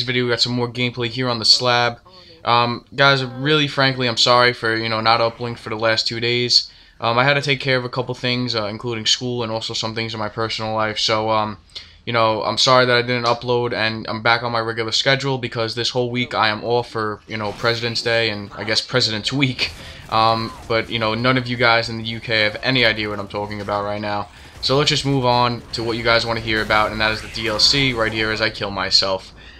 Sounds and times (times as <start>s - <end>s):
Speech: 0.0s - 29.5s.